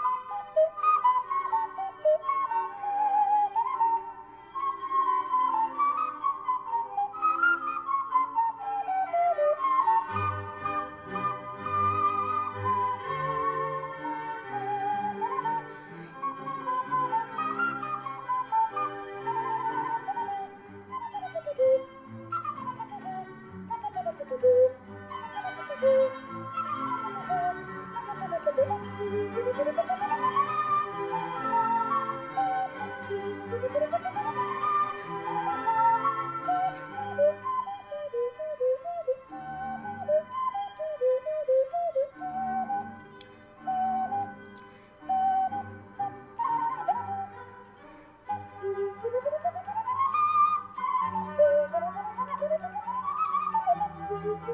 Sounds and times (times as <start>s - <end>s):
Music: 0.0s - 54.5s.